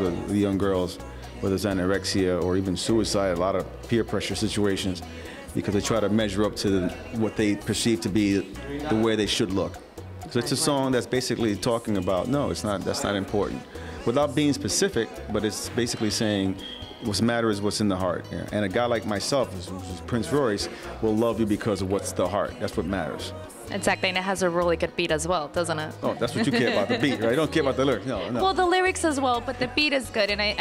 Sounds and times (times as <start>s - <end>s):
Speech: 0.0s - 25.3s, 26.1s - 29.4s
New-age music: 0.0s - 30.6s.